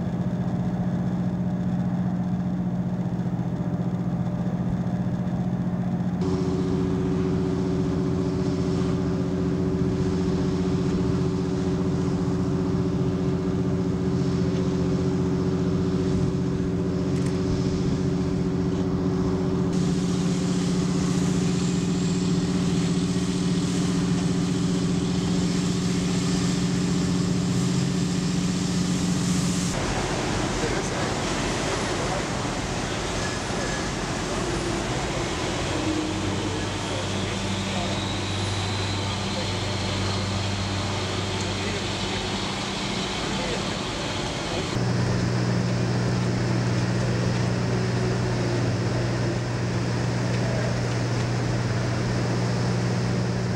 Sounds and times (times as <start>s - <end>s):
Vehicle: 0.0s - 53.5s
Waves, surf: 6.3s - 44.8s
Speech: 30.5s - 33.9s, 35.0s - 40.3s, 41.2s - 42.5s, 43.1s - 44.8s.